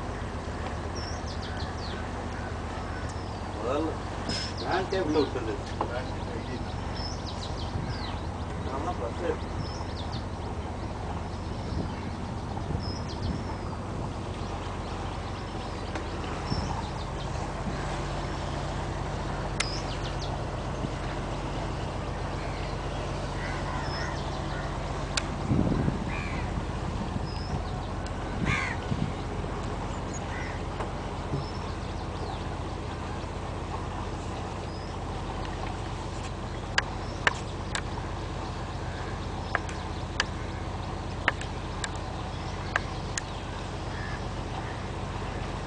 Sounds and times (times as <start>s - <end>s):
Motorboat, speedboat: 0.0s - 45.6s.